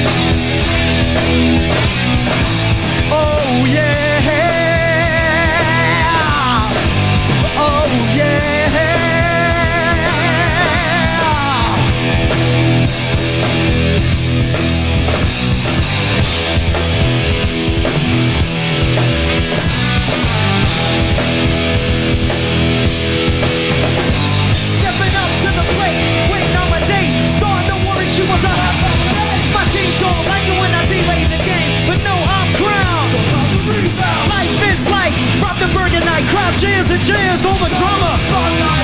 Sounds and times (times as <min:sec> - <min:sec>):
Music: 0:00.0 - 0:38.8.